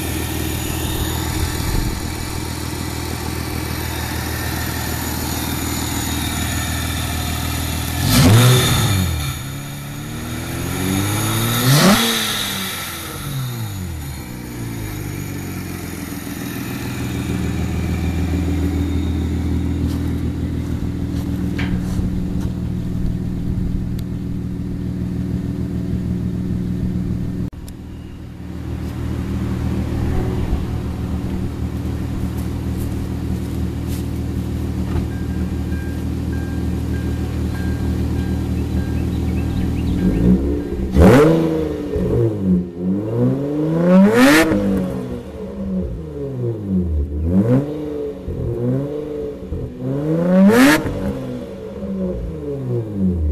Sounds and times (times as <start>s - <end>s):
Heavy engine (low frequency): 0.0s - 53.3s.